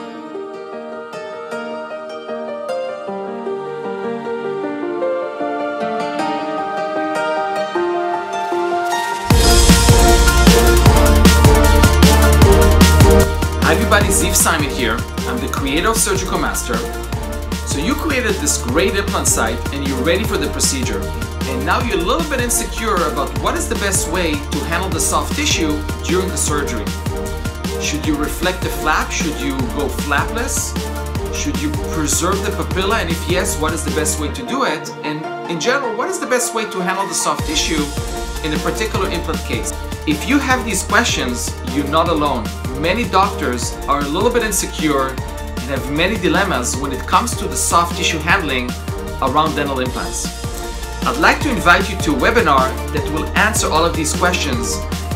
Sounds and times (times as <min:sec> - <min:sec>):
Music: 0:00.0 - 0:55.1
Speech: 0:13.6 - 0:17.0, 0:17.7 - 0:26.9, 0:27.8 - 0:30.8, 0:31.4 - 0:50.3, 0:51.0 - 0:54.8.